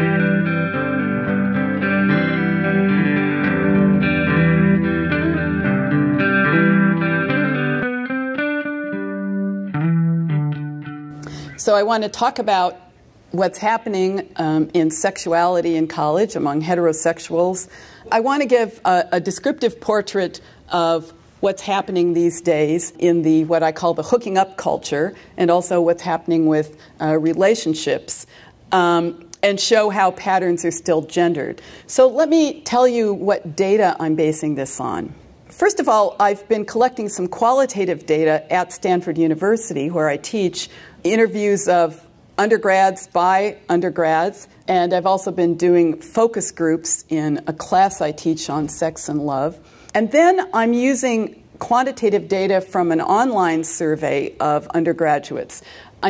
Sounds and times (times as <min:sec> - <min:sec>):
Music: 0:00.0 - 0:11.3
Speech: 0:11.6 - 0:56.1.